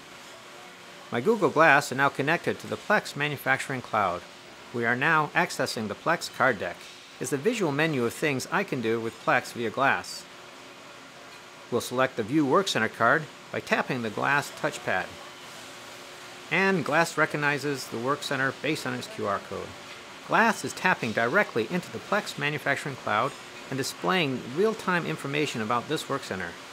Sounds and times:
Speech: 0.6 - 10.3, 11.7 - 15.2, 16.5 - 26.6.

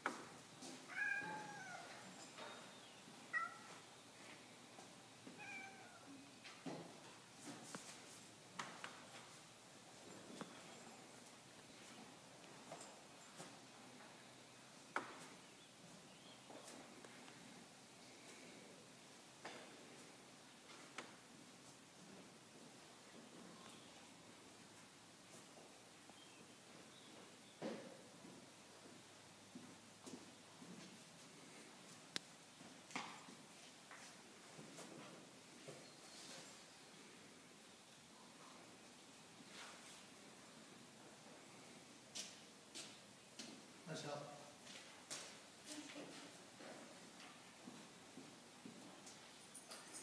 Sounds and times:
Animal: 0.9 - 2.0.

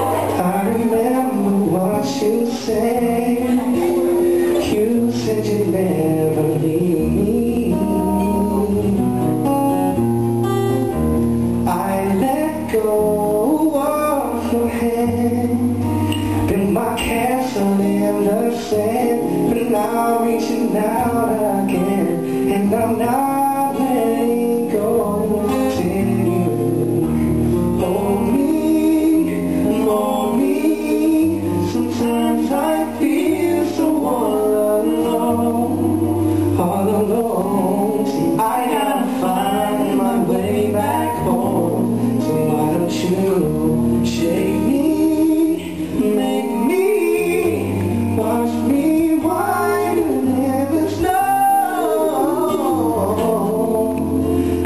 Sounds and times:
Male singing: 0.0 - 9.2, 11.7 - 54.6
Music: 0.0 - 54.6.

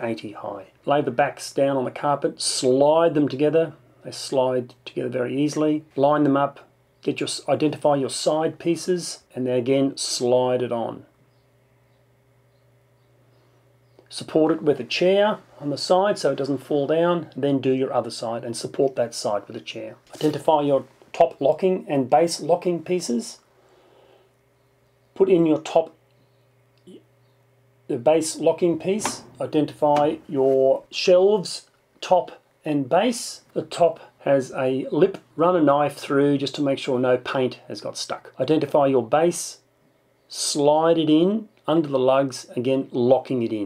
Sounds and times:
Speech: 0.0 - 11.1, 14.1 - 23.4, 25.2 - 26.0, 27.9 - 39.7, 40.3 - 43.6.

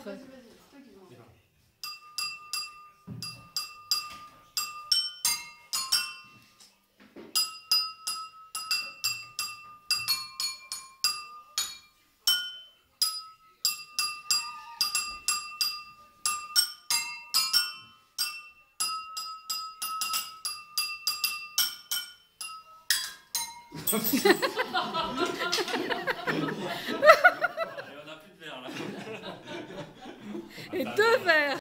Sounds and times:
Chink, clink: 1.8 - 6.5, 7.4 - 24.2
Speech: 30.7 - 31.6.

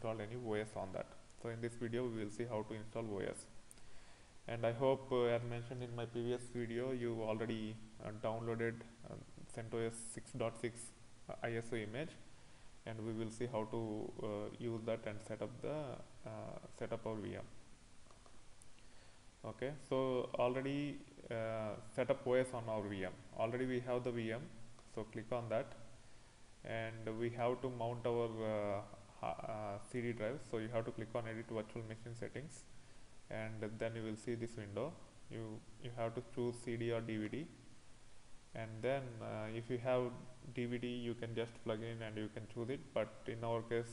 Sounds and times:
Speech: 0.0 - 3.6, 4.5 - 12.2, 12.8 - 17.6, 19.4 - 25.9, 26.6 - 32.7, 33.3 - 37.6, 38.6 - 43.9
Inside, small room: 0.0 - 43.9.

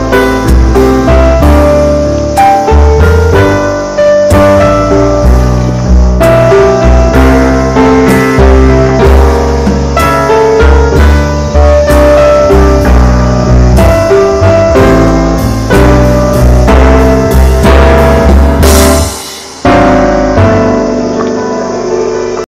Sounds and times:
Music: 0.0 - 22.5.

